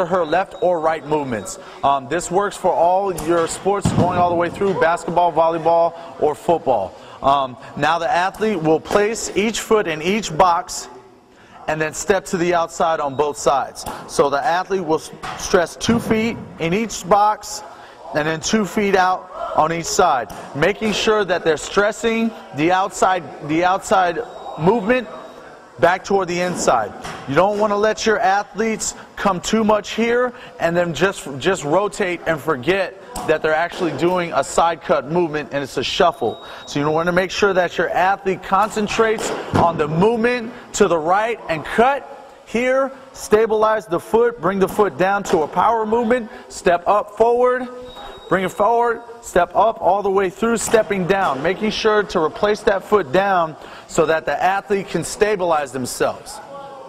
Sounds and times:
Speech: 0.0s - 56.8s.

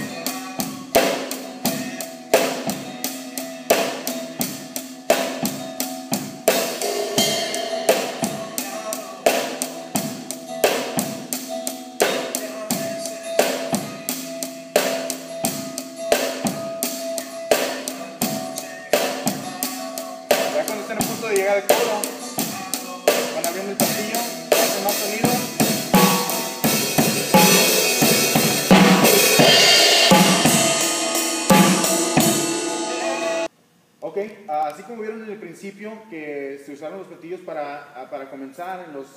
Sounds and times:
Drum: 0.0s - 33.5s
Drum kit: 0.0s - 33.5s
Cymbal: 6.5s - 11.0s, 24.2s - 33.5s
Speech: 20.4s - 25.6s, 32.9s - 39.1s.

